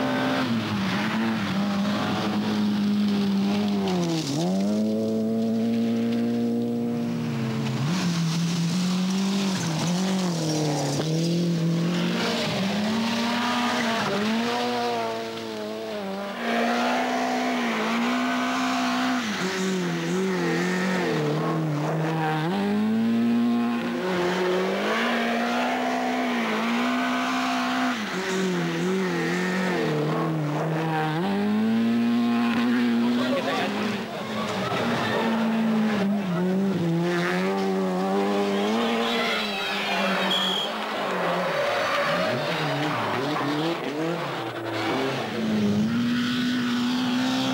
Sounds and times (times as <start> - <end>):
Race car, auto racing: 0.0 - 47.5
Skidding: 0.0 - 47.5
Tire squeal: 24.2 - 29.9, 33.2 - 36.6, 38.2 - 47.5.